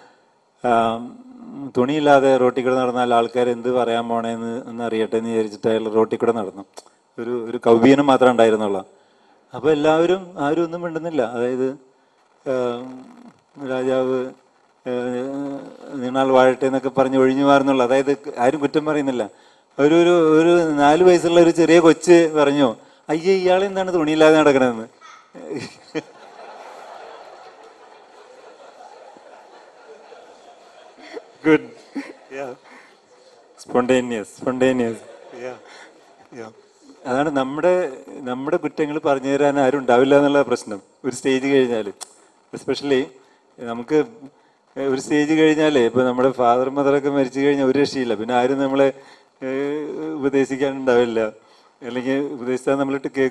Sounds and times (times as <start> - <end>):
Narration, monologue: 0.0 - 53.3
Male speech, man speaking: 0.6 - 8.9, 9.6 - 11.8, 12.5 - 25.7, 31.4 - 32.6, 33.6 - 35.6, 36.4 - 42.0, 42.6 - 44.2, 44.8 - 53.3.